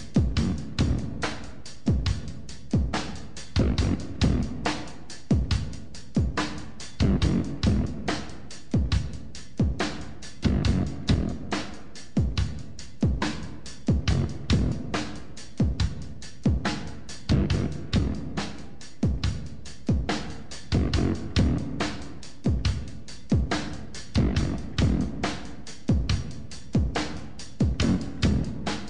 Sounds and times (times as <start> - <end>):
Music: 0.0 - 28.8.